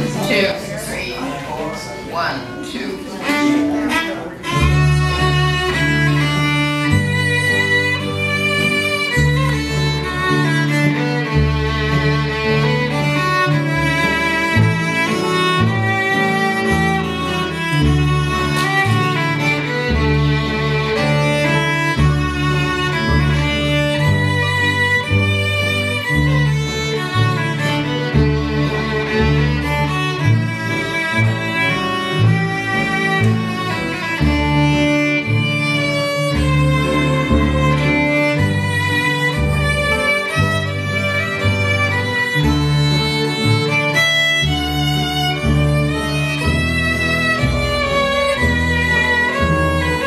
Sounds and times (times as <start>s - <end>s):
Violin, fiddle: 0.0s - 50.0s.